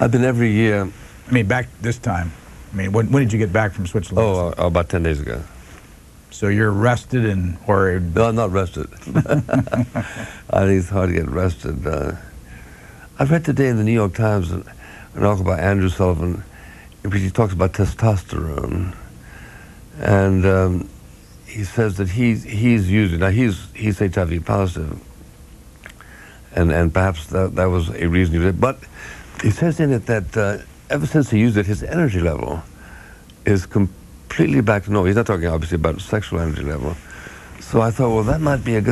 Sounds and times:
Speech: 0.0s - 5.5s, 6.3s - 12.3s, 13.2s - 19.1s, 20.0s - 20.9s, 21.5s - 25.0s, 26.5s - 32.7s, 33.4s - 37.0s, 37.6s - 38.9s.

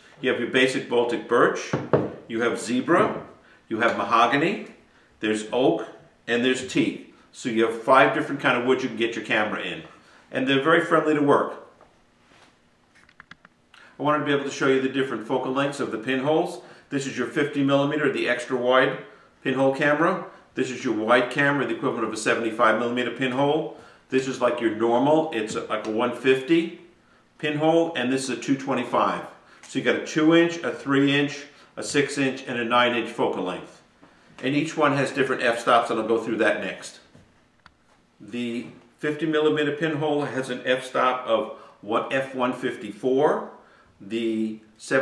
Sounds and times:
Speech: 0.2s - 11.7s, 14.0s - 26.8s, 27.4s - 33.8s, 34.4s - 37.1s, 38.2s - 45.0s.

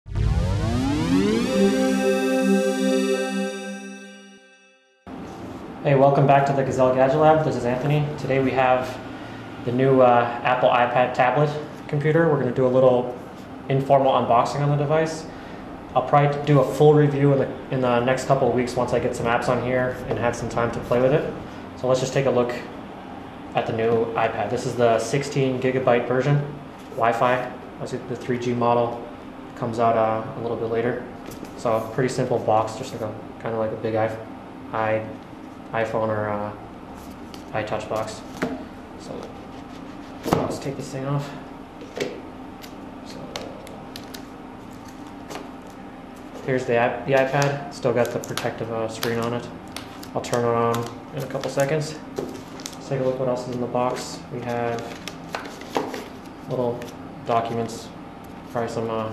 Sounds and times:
Synthesizer: 0.1s - 5.0s
Speech: 5.8s - 9.0s, 9.6s - 15.3s, 15.9s - 22.7s, 23.6s - 36.6s, 37.5s - 38.3s, 39.0s - 39.4s, 40.3s - 41.4s, 43.0s - 43.8s, 46.4s - 49.6s, 50.2s - 52.1s, 52.8s - 55.0s, 56.5s - 59.1s.

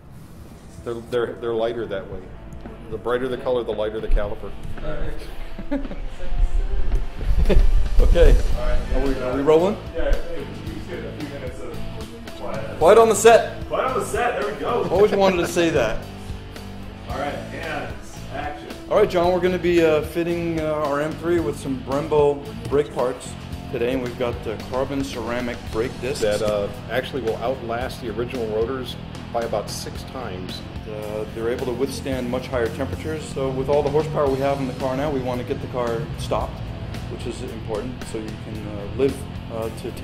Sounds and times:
Music: 0.0s - 40.0s
Speech: 0.8s - 2.3s, 2.9s - 5.3s, 8.0s - 16.0s, 17.1s - 40.0s.

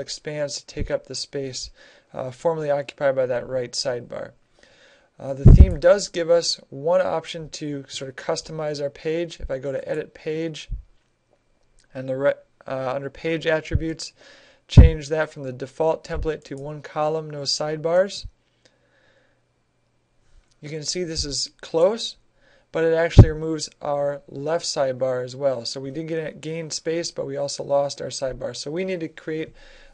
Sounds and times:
Speech: 0.0s - 4.4s, 5.2s - 10.8s, 11.9s - 18.4s, 20.6s - 29.6s.

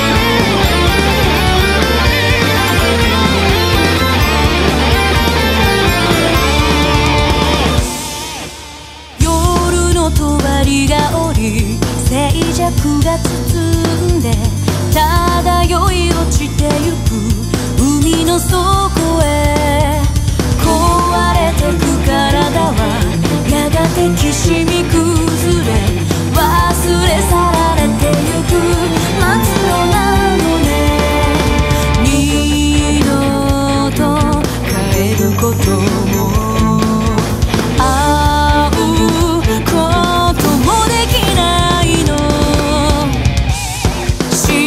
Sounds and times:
Music: 0.0s - 44.6s.

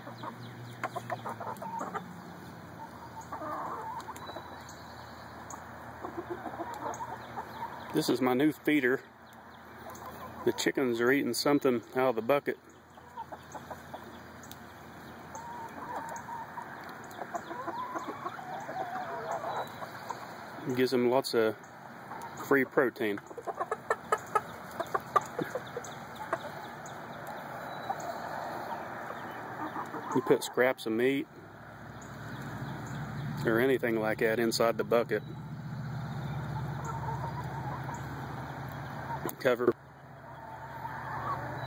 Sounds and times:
Chicken, rooster: 0.0s - 2.1s, 2.8s - 4.8s, 5.5s - 8.0s, 13.0s - 14.2s, 15.3s - 20.4s, 23.1s - 30.8s, 36.3s - 39.4s, 40.2s - 41.6s
Speech: 8.0s - 9.1s, 10.5s - 12.6s, 20.6s - 21.6s, 22.4s - 23.2s, 30.2s - 31.3s, 33.4s - 35.3s, 39.2s - 39.8s.

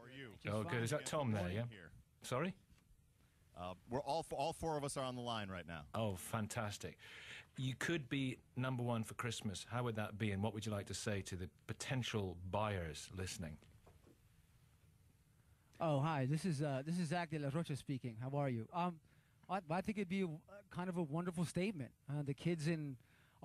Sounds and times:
Speech: 0.0s - 2.6s, 3.6s - 7.0s, 7.6s - 13.7s, 15.8s - 23.4s.

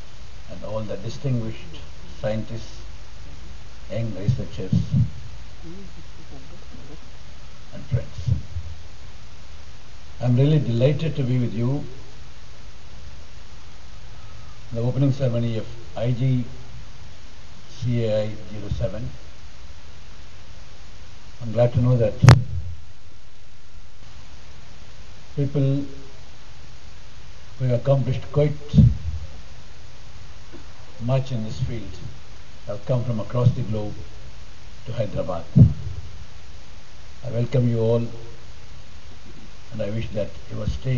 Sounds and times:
Male speech, man speaking: 0.5s - 2.8s, 3.9s - 5.1s, 7.7s - 8.4s, 10.2s - 12.0s, 14.7s - 16.6s, 17.7s - 19.2s, 21.4s - 22.4s, 25.4s - 26.0s, 27.6s - 29.0s, 31.0s - 32.1s, 32.7s - 34.0s, 34.9s - 35.6s, 37.2s - 38.2s, 39.7s - 40.9s.

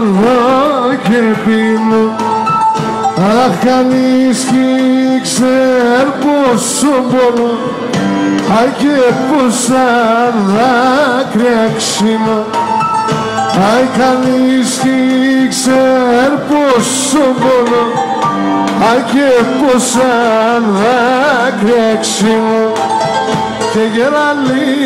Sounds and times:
Folk music: 0.0s - 24.8s.

